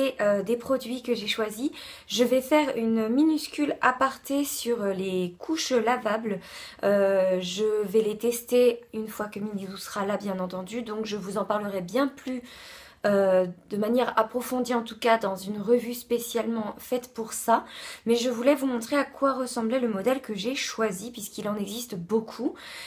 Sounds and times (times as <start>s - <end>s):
Speech: 0.0s - 22.6s.